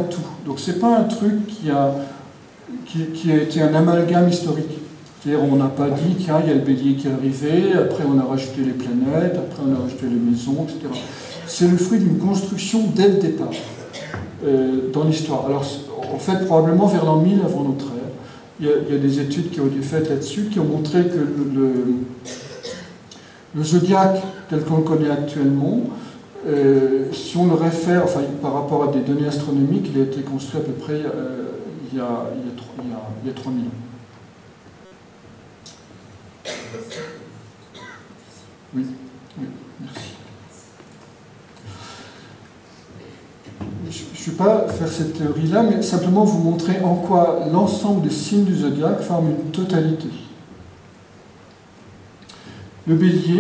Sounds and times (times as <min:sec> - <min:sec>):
Speech: 0:00.0 - 0:22.9, 0:23.5 - 0:34.0, 0:38.3 - 0:40.7, 0:43.0 - 0:50.4, 0:52.8 - 0:53.4.